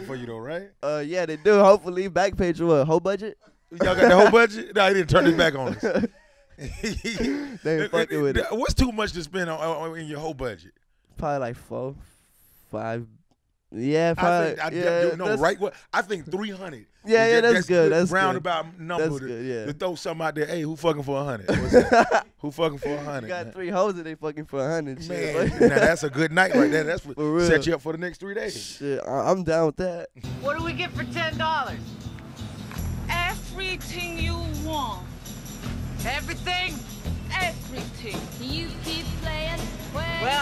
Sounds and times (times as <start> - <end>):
Speech: 0.0 - 5.8, 7.0 - 12.0, 13.8 - 21.5, 22.4 - 30.1
Music: 30.2 - 40.4.